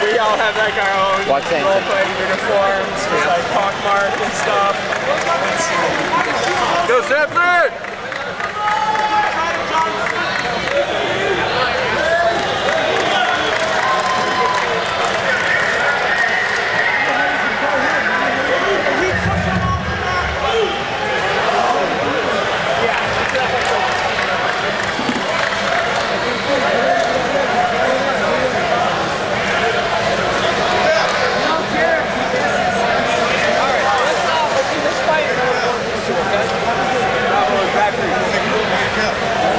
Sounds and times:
Speech: 0.0s - 39.5s.

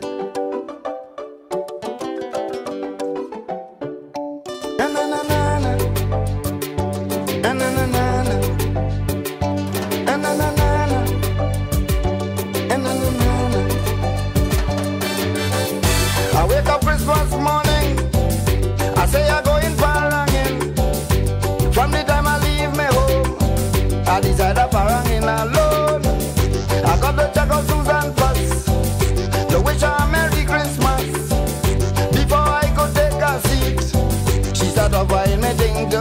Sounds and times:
Music: 0.0s - 36.0s.

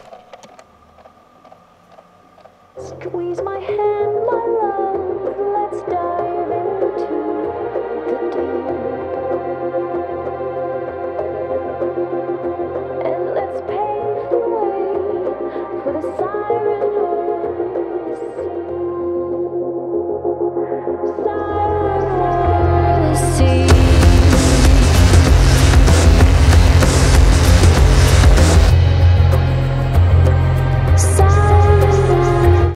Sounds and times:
Music: 2.7s - 32.7s.

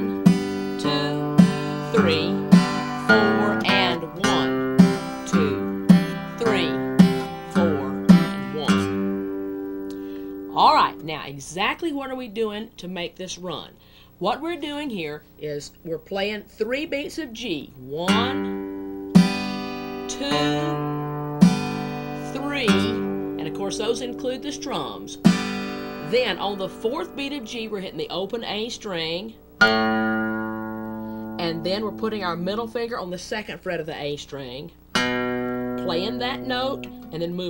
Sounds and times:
Strum: 0.0s - 11.7s, 17.9s - 33.3s, 34.9s - 37.5s
Speech: 0.8s - 1.3s, 1.9s - 2.4s, 3.1s - 4.6s, 5.2s - 5.7s, 6.4s - 6.9s, 7.5s - 8.9s, 10.5s - 18.5s, 20.1s - 20.8s, 22.2s - 25.2s, 26.0s - 29.4s, 31.4s - 34.8s, 35.8s - 37.5s.

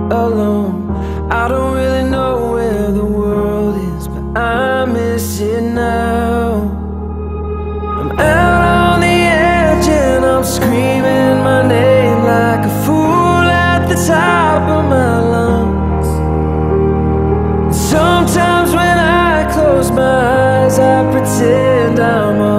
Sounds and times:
Music: 0.0s - 22.5s.

